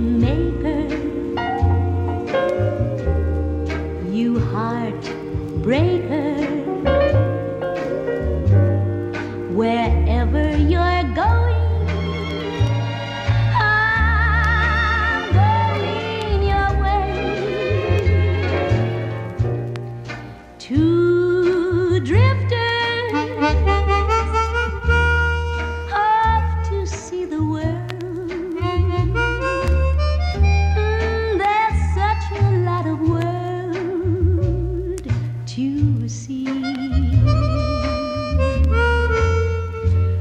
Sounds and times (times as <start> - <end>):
Saxophone: 22.8 - 27.0, 28.0 - 31.5, 36.5 - 40.2.